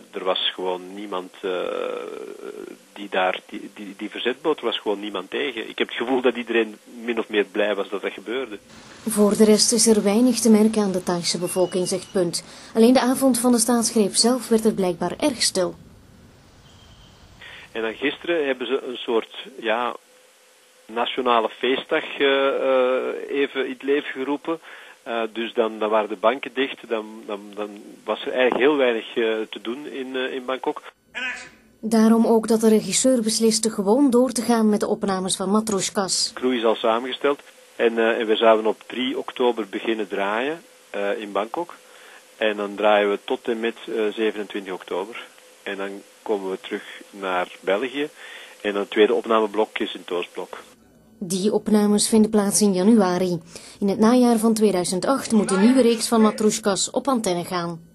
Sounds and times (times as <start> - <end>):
Speech: 0.0 - 15.8, 17.5 - 20.0, 20.9 - 41.8, 42.4 - 57.8
Vehicle: 15.8 - 17.5.